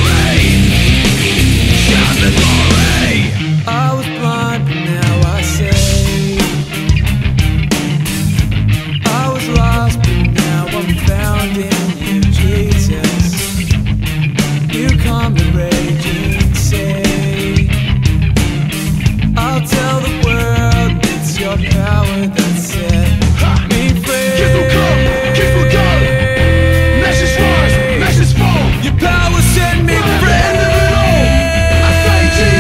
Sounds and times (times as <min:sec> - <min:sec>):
Music: 0:00.0 - 0:32.6.